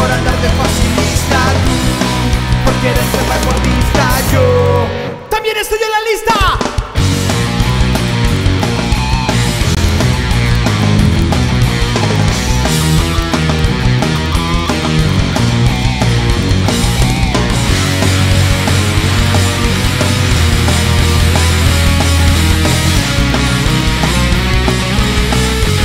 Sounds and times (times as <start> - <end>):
Singing: 0.0 - 5.1
Heavy metal: 0.0 - 5.3, 6.5 - 25.8
Percussion: 6.6 - 25.8.